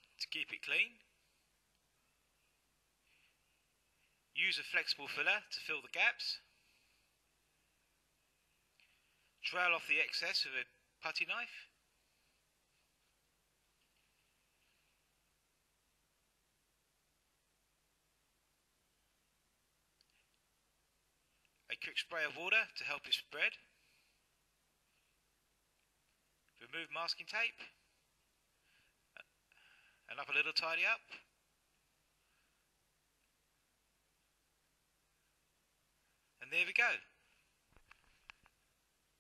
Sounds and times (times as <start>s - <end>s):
Speech: 0.2s - 1.1s, 4.4s - 6.5s, 9.4s - 11.8s, 21.7s - 23.7s, 26.6s - 27.8s, 30.1s - 31.3s, 36.4s - 37.2s.